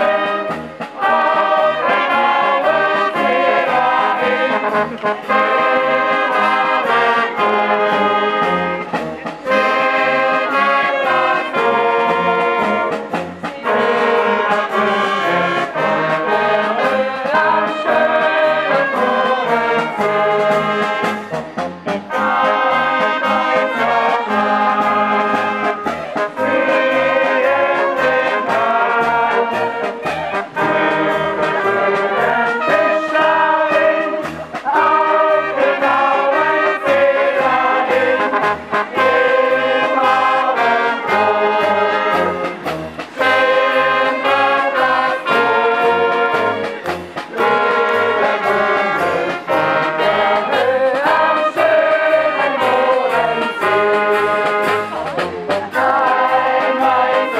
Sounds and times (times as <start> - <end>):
Music: 0.0 - 57.3.